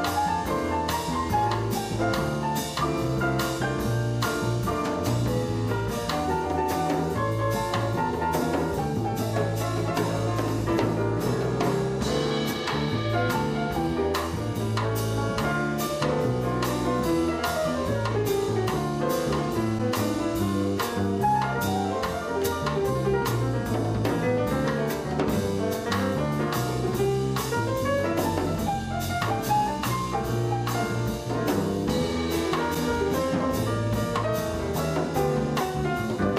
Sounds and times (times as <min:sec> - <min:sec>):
Piano: 0:00.0 - 0:36.3.